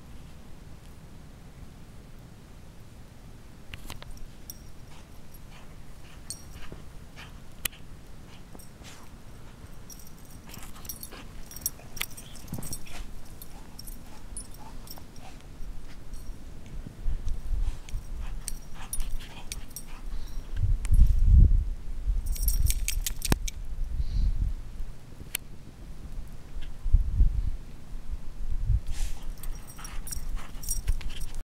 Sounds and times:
Dog: 0:04.5 - 0:16.2, 0:17.6 - 0:20.5, 0:29.0 - 0:31.4.

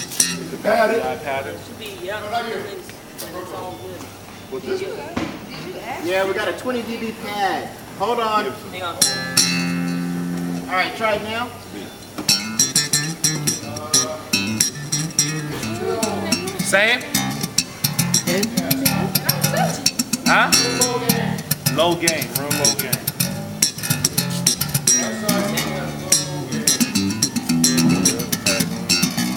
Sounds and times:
Music: 0:00.0 - 0:00.6, 0:09.0 - 0:10.9, 0:12.2 - 0:29.3
Speech: 0:20.3 - 0:23.0, 0:25.0 - 0:26.9.

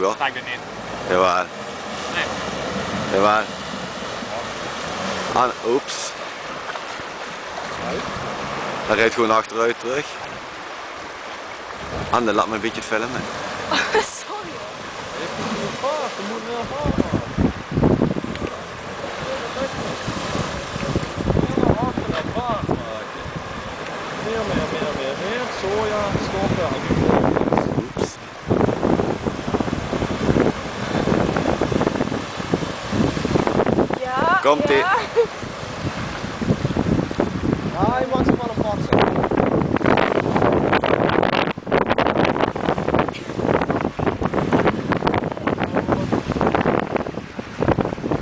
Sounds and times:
Stream: 0:00.0 - 0:48.2.

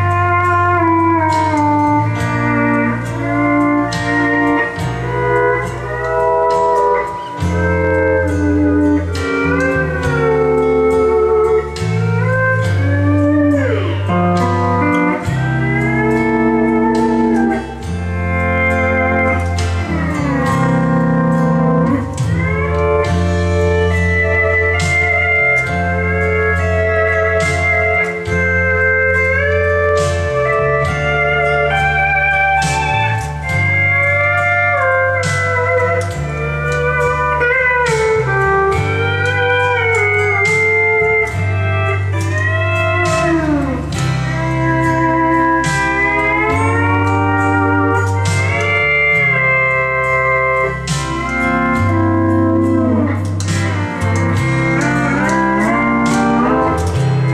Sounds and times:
Steel guitar, slide guitar: 0:00.0 - 0:57.3.

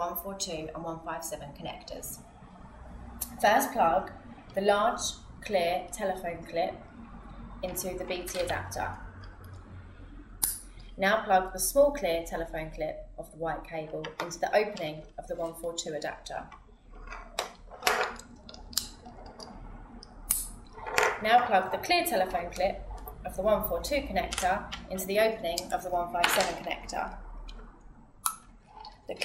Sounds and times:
Speech: 0:00.0 - 0:02.2, 0:03.2 - 0:06.8, 0:07.6 - 0:09.0, 0:11.0 - 0:16.5, 0:21.2 - 0:27.2.

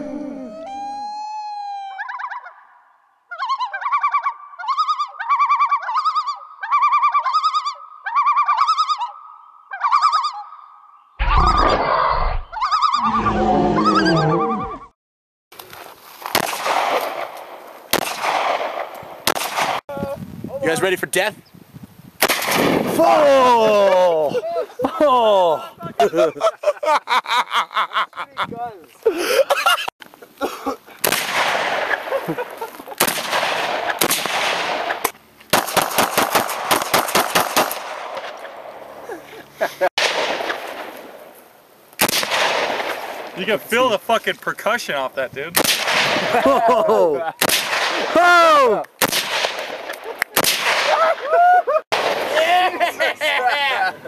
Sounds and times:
Wild animals: 0:00.0 - 0:02.0, 0:11.2 - 0:14.9
Outside, rural or natural: 0:00.0 - 0:54.0.

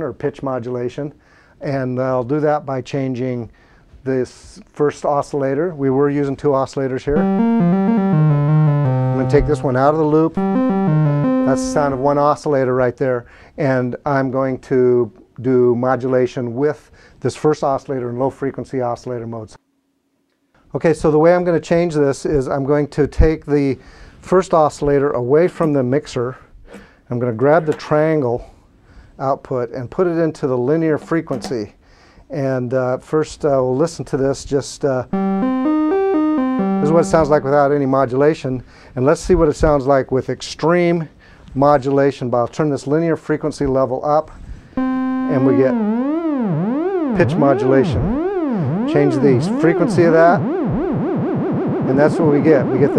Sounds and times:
Speech: 0:00.0 - 0:07.2, 0:09.2 - 0:10.4, 0:11.5 - 0:19.6, 0:20.7 - 0:26.5, 0:27.1 - 0:28.5, 0:29.2 - 0:35.1, 0:36.8 - 0:44.4, 0:45.3 - 0:45.9, 0:47.2 - 0:48.1, 0:48.8 - 0:50.4, 0:51.9 - 0:52.9.

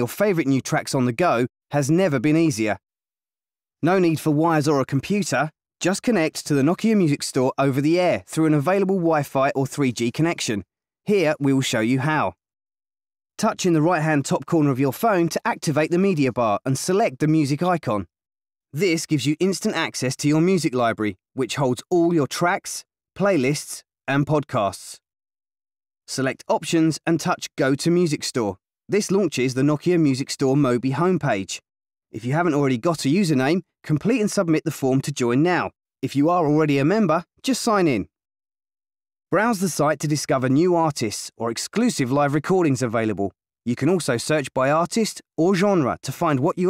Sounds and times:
Speech: 0:00.0 - 0:02.8, 0:03.8 - 0:12.4, 0:13.4 - 0:18.1, 0:18.8 - 0:25.0, 0:26.1 - 0:31.6, 0:32.2 - 0:38.1, 0:39.3 - 0:46.6.

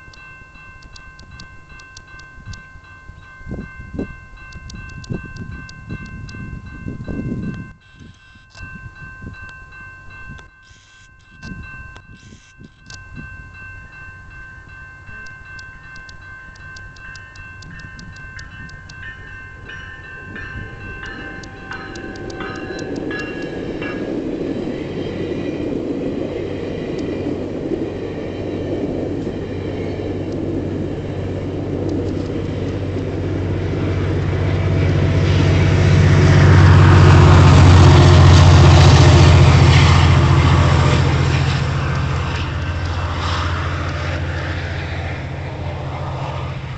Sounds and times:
Vehicle: 0:25.7 - 0:46.7.

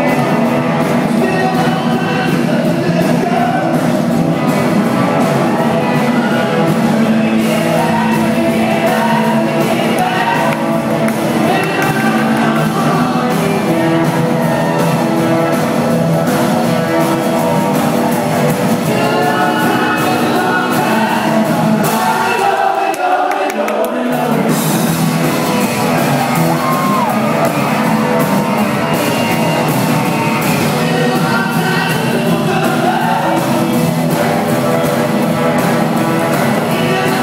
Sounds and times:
Rock and roll: 0:00.0 - 0:37.2.

